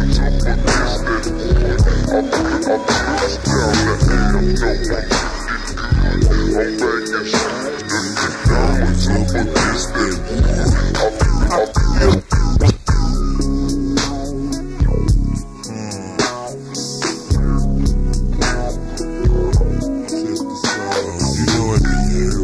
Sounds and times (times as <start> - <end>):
Music: 0.0 - 22.4.